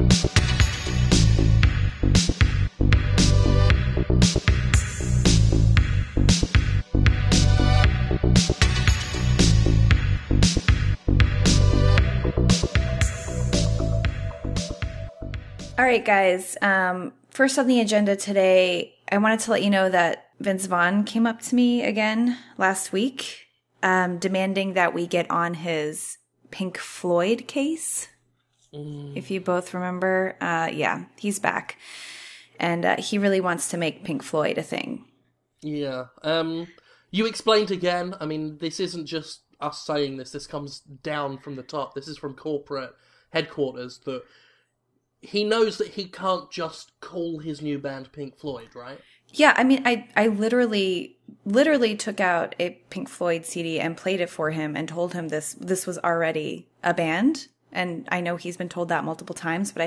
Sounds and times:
Speech: 15.8 - 28.1, 28.8 - 31.8, 32.6 - 35.0, 35.6 - 44.2, 45.3 - 59.8.

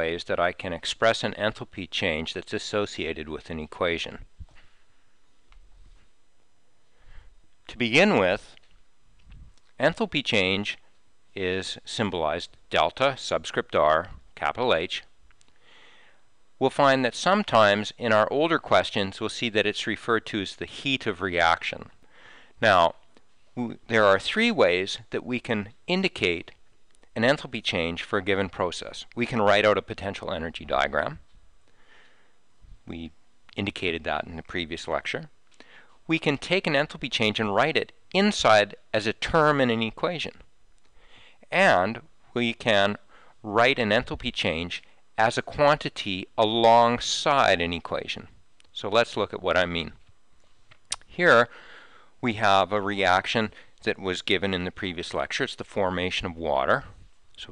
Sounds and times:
Speech: 0.0 - 4.3, 7.7 - 8.6, 9.8 - 15.2, 16.6 - 22.0, 22.6 - 31.3, 32.8 - 35.3, 36.0 - 40.5, 41.4 - 50.0, 51.0 - 51.5, 52.2 - 57.5.

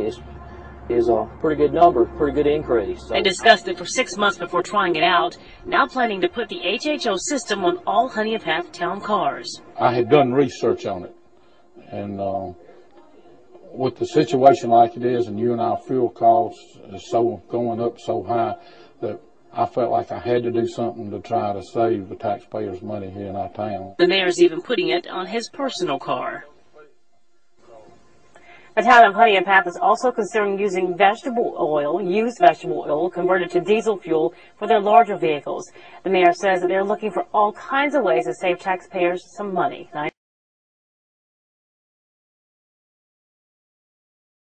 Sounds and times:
Speech: 0.0 - 0.2, 0.9 - 11.1, 11.8 - 26.5, 28.8 - 40.2.

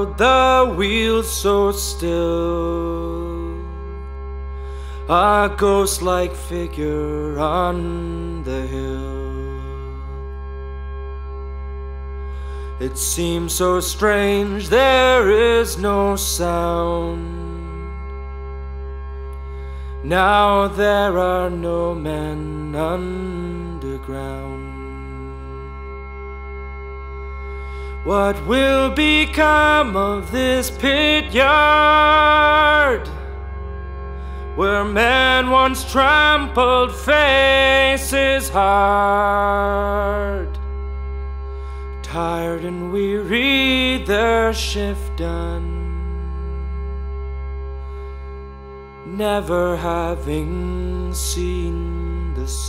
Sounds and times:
Music: 0.0 - 52.6.

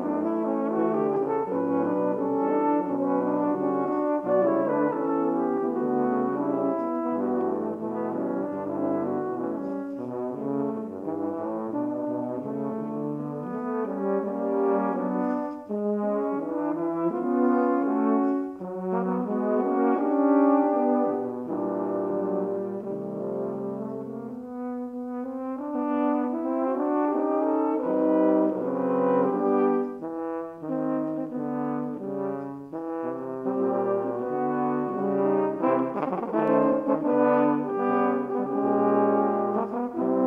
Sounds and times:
French horn: 0.0 - 40.2.

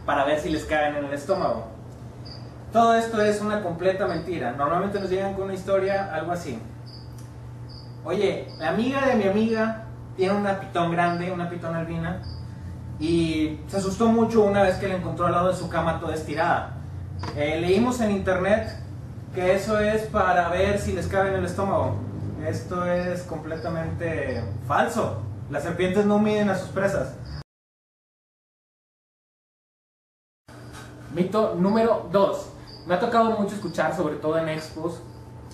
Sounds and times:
Speech: 0.0 - 1.8, 2.8 - 6.7, 8.1 - 12.2, 13.0 - 27.2, 31.1 - 35.1.

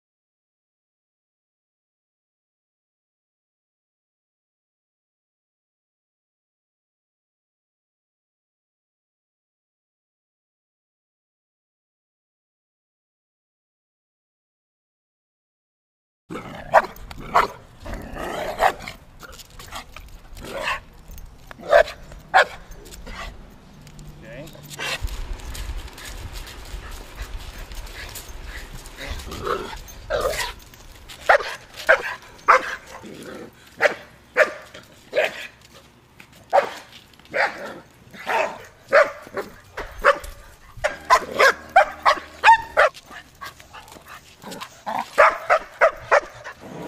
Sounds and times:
Bow-wow: 16.3 - 17.6, 18.2 - 19.0, 21.6 - 23.3, 29.0 - 30.6, 31.3 - 33.0, 33.8 - 35.5, 36.5 - 43.0, 44.5 - 46.8
Yip: 21.6 - 22.6, 31.3 - 32.8, 33.8 - 35.5, 36.5 - 43.0, 45.2 - 46.4.

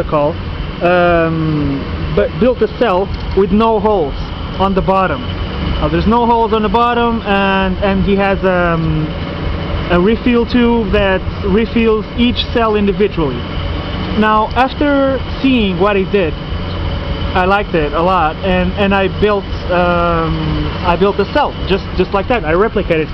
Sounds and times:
Speech: 0.0 - 9.2, 9.9 - 13.4, 14.2 - 16.4, 17.4 - 23.1.

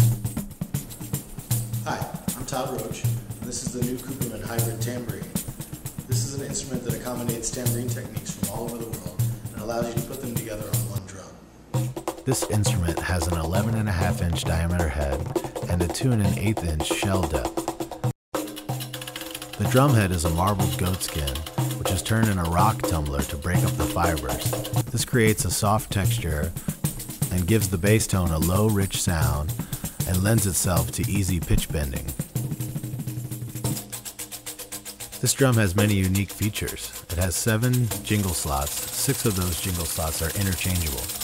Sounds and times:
Drum: 0.0 - 11.0, 11.7 - 41.2
Speech: 1.9 - 5.4, 6.1 - 11.4, 12.3 - 17.5, 19.6 - 26.6, 27.2 - 32.2, 35.2 - 41.2
Tambourine: 26.4 - 41.2.

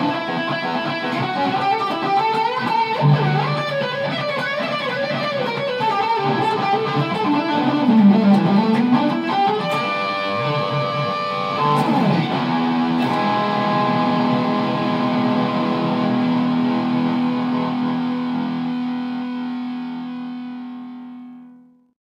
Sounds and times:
Guitar: 0.0 - 22.0.

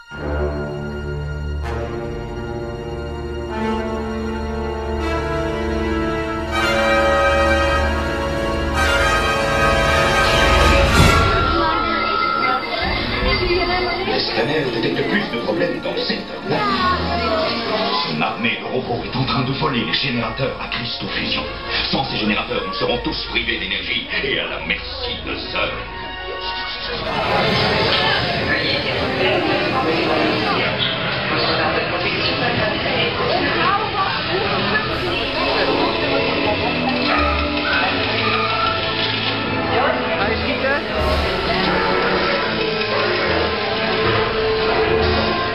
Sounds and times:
Music: 0.0 - 45.5
Speech: 11.3 - 43.8.

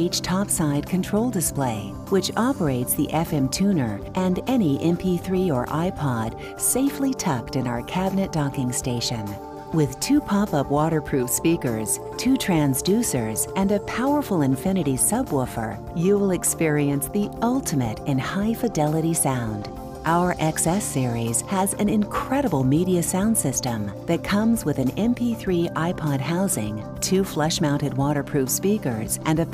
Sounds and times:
Music: 0.0 - 29.5
Speech: 0.0 - 29.5.

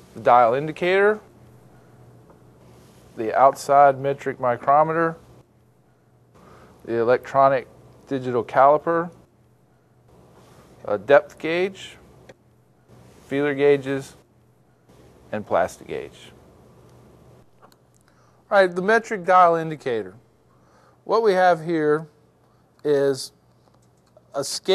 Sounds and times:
Speech: 0.2 - 1.3, 3.2 - 5.2, 6.8 - 9.2, 10.8 - 12.1, 13.3 - 14.2, 15.3 - 16.4, 18.5 - 20.2, 21.1 - 22.2, 22.8 - 23.4, 24.3 - 24.7.

